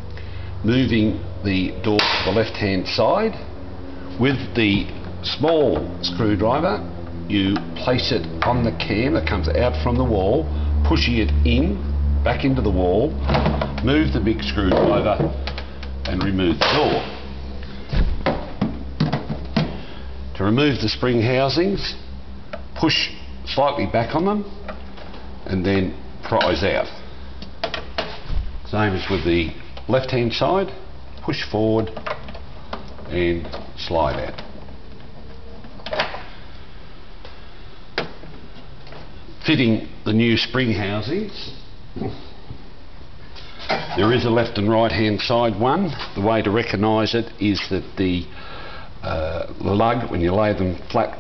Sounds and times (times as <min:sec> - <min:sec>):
Speech: 0:00.6 - 0:03.5, 0:04.2 - 0:13.2, 0:13.8 - 0:15.4, 0:16.1 - 0:17.2, 0:20.4 - 0:22.0, 0:22.8 - 0:24.6, 0:25.5 - 0:27.0, 0:28.7 - 0:32.0, 0:33.1 - 0:34.4, 0:39.4 - 0:42.3, 0:43.9 - 0:48.3, 0:49.0 - 0:51.2.